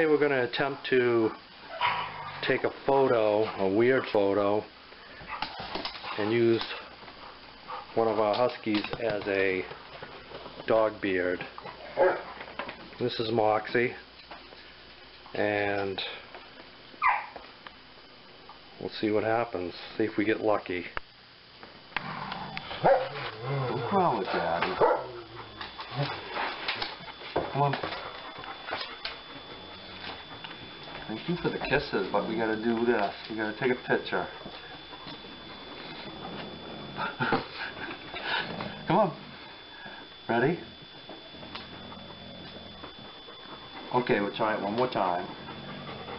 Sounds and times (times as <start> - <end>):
Speech: 0.0 - 1.4, 2.4 - 4.7, 6.2 - 6.9, 8.0 - 9.8, 10.7 - 11.6, 13.0 - 14.1, 15.4 - 16.3, 18.8 - 21.0, 23.7 - 24.8, 31.1 - 34.4, 38.9 - 39.2, 40.3 - 40.7, 43.9 - 45.3.